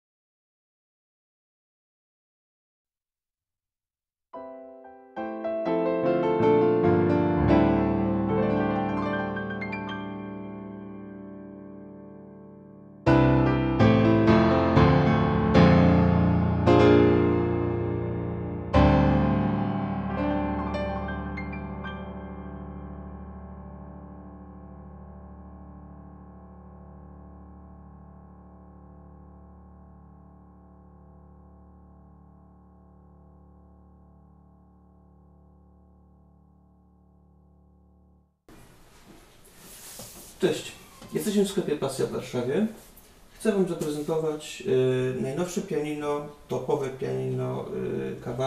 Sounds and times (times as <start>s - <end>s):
Music: 4.4s - 36.8s.